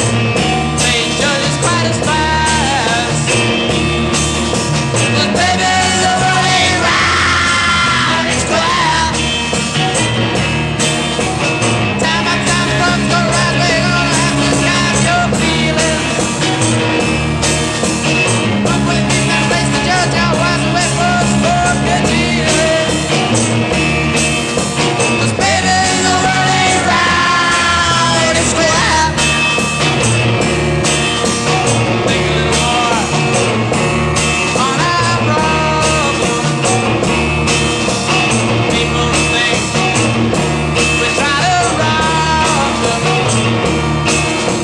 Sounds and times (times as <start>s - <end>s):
Rock and roll: 0.0s - 44.6s.